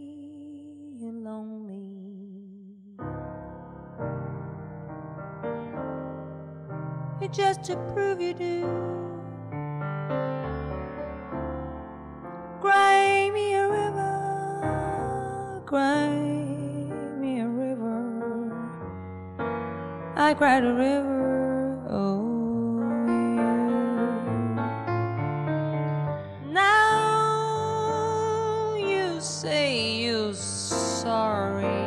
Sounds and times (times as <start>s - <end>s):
Piano: 0.0s - 2.1s, 3.0s - 31.8s.